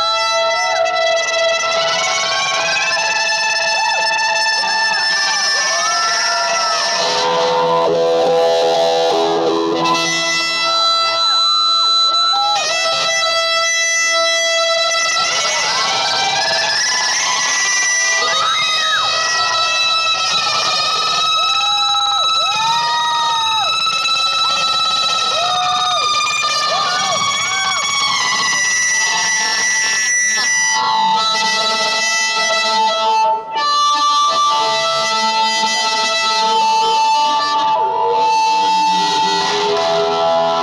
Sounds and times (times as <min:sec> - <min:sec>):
Musical instrument: 0:00.0 - 0:23.0, 0:23.6 - 0:40.6.